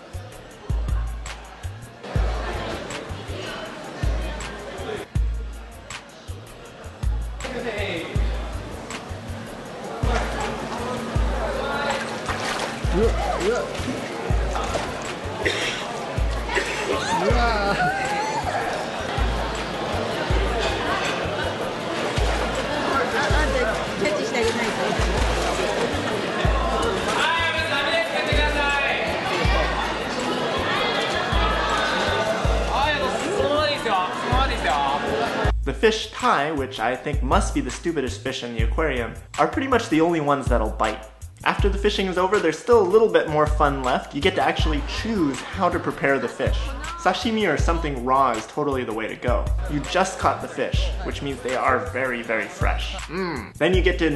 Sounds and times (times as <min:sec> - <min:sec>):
Music: 0:00.0 - 0:54.1.